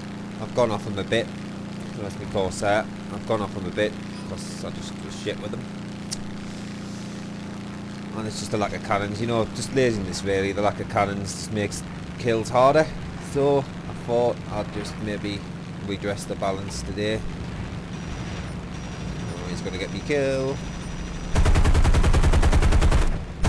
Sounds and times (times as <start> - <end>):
Speech: 0.4 - 1.3, 1.9 - 5.7, 8.1 - 17.3, 19.3 - 20.6.